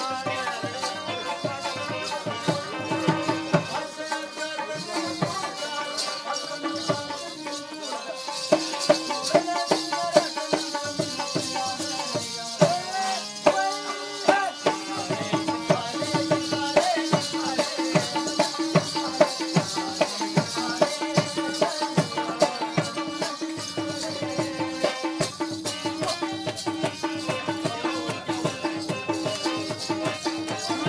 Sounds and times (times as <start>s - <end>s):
Tabla: 0.0s - 30.8s.